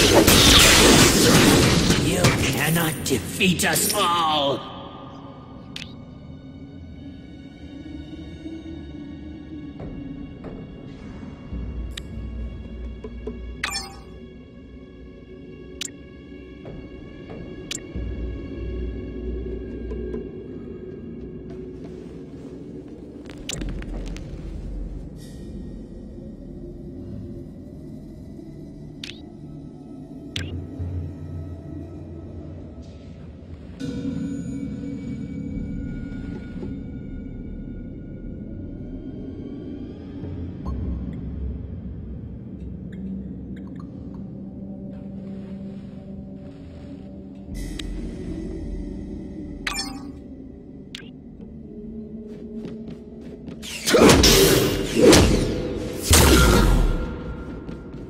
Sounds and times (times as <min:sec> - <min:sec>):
Scary music: 0:00.0 - 0:58.1.